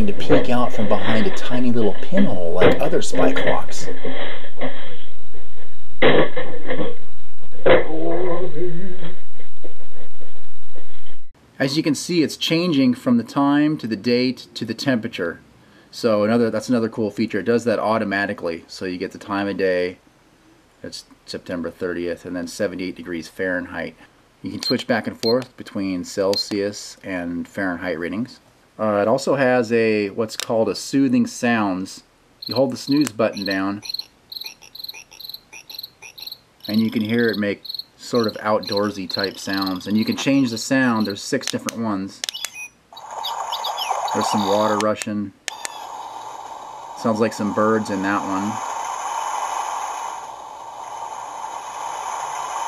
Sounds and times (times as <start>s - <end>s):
Speech: 0.0s - 4.0s, 7.7s - 9.0s, 11.6s - 20.0s, 20.8s - 33.8s, 36.7s - 42.2s, 44.2s - 45.4s, 47.0s - 48.6s.